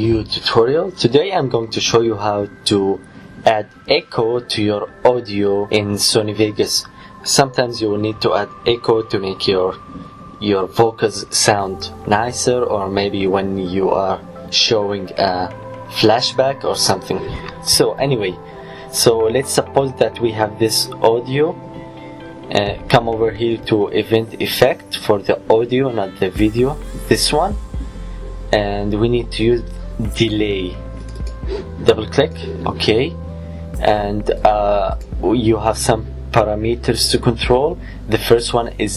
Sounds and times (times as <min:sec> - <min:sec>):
Speech: 0:00.0 - 0:09.8, 0:10.4 - 0:21.6, 0:22.5 - 0:27.6, 0:28.5 - 0:30.8, 0:31.8 - 0:33.2, 0:33.8 - 0:38.9
Music: 0:00.0 - 0:38.9.